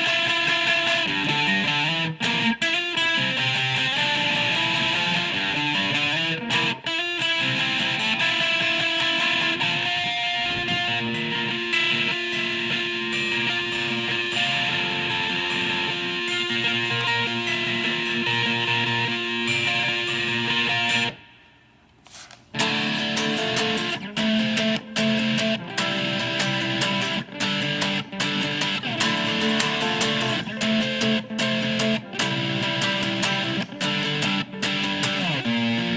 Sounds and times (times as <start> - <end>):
Acoustic guitar: 0.0 - 21.2, 22.6 - 35.9
Electric guitar: 0.0 - 21.3, 22.5 - 35.9.